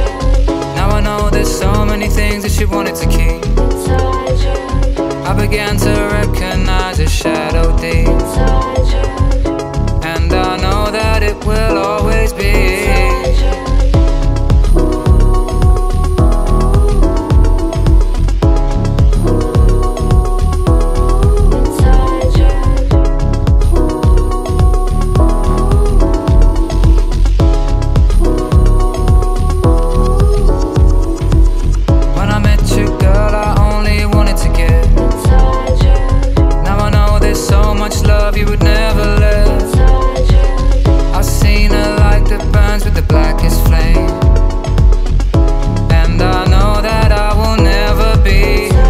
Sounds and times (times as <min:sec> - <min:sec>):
Music: 0:00.0 - 0:48.9.